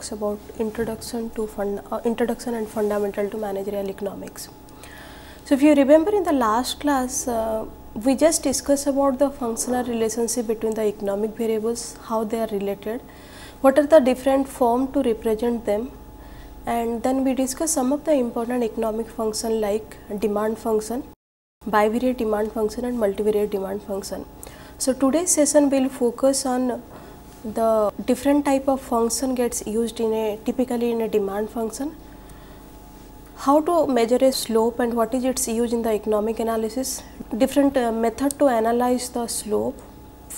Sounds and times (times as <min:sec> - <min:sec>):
Speech: 0:00.0 - 0:04.6, 0:05.5 - 0:13.0, 0:13.6 - 0:16.0, 0:16.7 - 0:26.9, 0:27.5 - 0:32.0, 0:33.4 - 0:40.3.